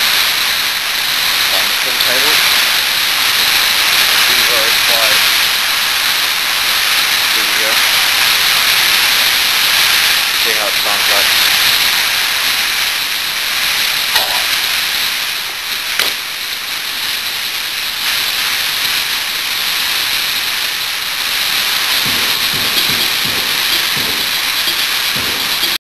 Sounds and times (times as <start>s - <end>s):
Music: 22.1s - 25.8s.